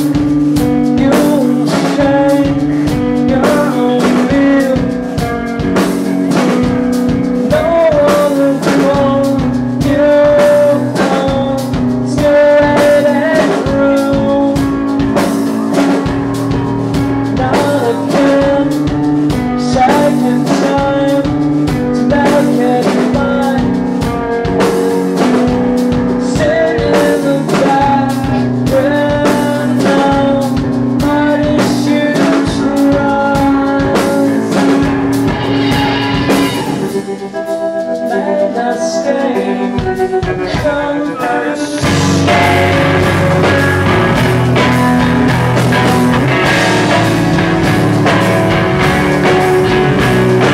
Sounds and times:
Music: 0:00.0 - 0:50.5.

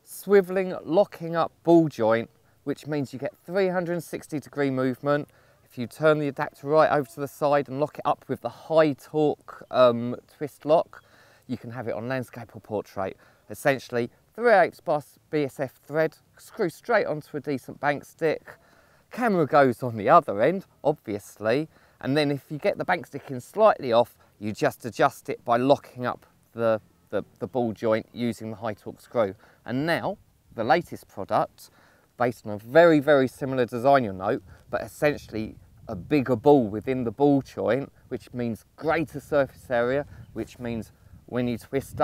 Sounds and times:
Speech: 0:00.0 - 0:42.0.

